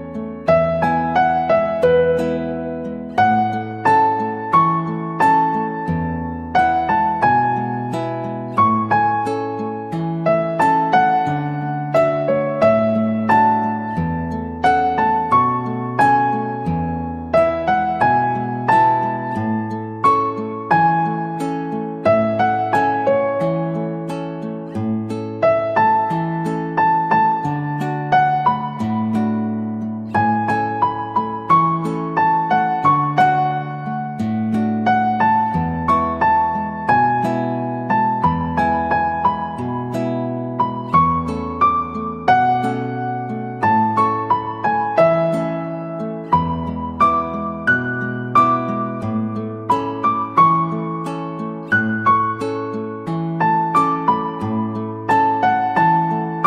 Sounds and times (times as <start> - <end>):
Music: 0.0 - 56.4.